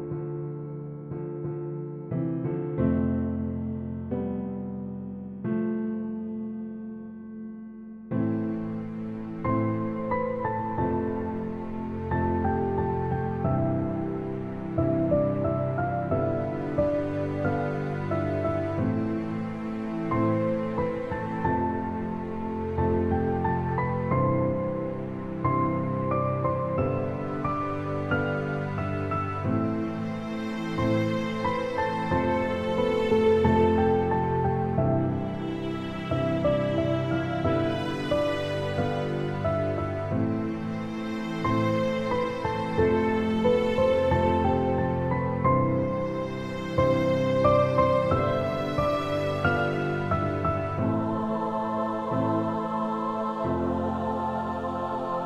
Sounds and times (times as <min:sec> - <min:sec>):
Music: 0:00.0 - 0:55.2.